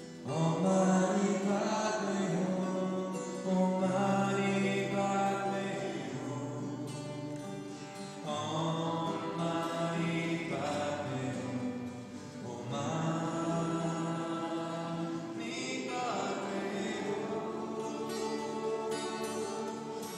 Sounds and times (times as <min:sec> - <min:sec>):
Guitar: 0:00.0 - 0:20.1
Mantra: 0:00.2 - 0:20.1.